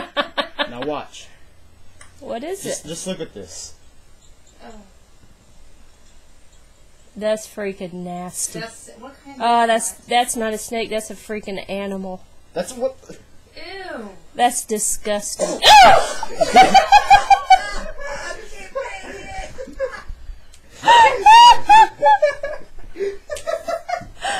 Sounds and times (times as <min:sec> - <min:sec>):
Female speech, woman speaking: 0:02.2 - 0:02.9, 0:07.2 - 0:12.2, 0:13.6 - 0:15.6.